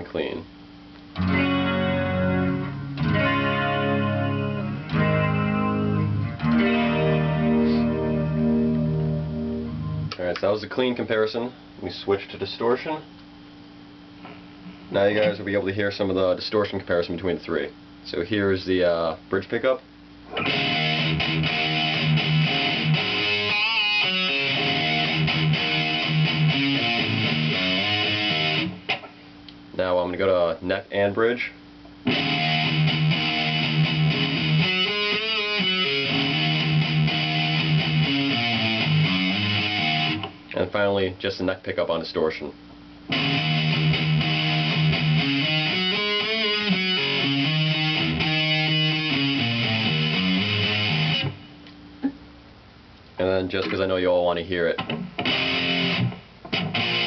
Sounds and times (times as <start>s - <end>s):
Speech: 0.0s - 0.5s, 10.2s - 13.1s, 14.9s - 19.8s, 29.8s - 31.6s, 40.5s - 42.6s, 53.2s - 54.8s
Music: 1.2s - 10.2s, 20.4s - 29.0s, 32.1s - 40.3s, 43.1s - 51.4s, 55.2s - 57.0s.